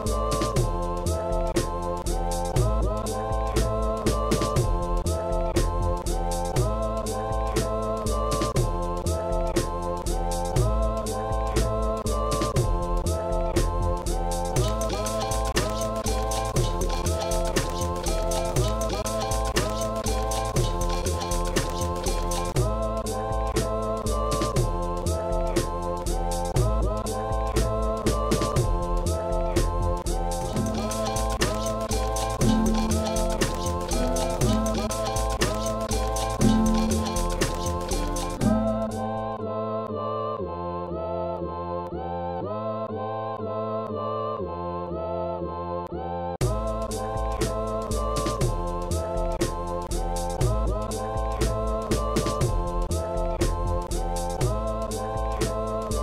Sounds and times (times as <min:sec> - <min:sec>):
Music: 0:00.0 - 0:56.0.